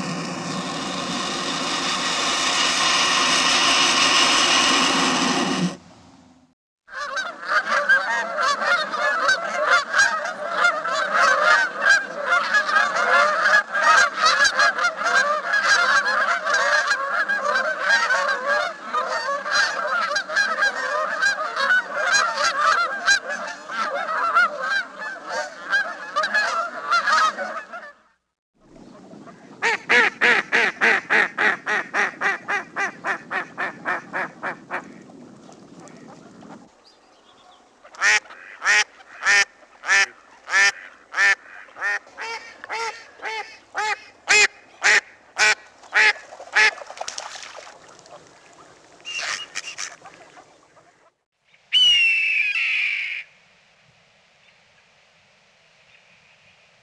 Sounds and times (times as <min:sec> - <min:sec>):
Honk: 0:06.9 - 0:28.2, 0:29.3 - 0:35.0, 0:37.8 - 0:46.8, 0:49.1 - 0:51.2.